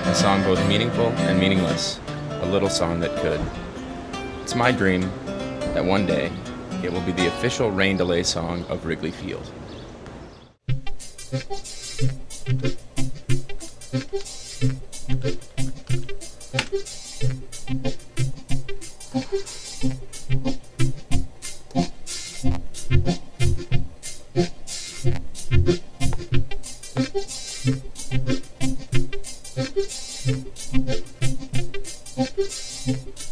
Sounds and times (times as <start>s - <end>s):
Speech: 0.0s - 3.5s, 4.5s - 5.2s, 5.8s - 9.6s
Music: 0.0s - 8.5s, 10.7s - 33.3s.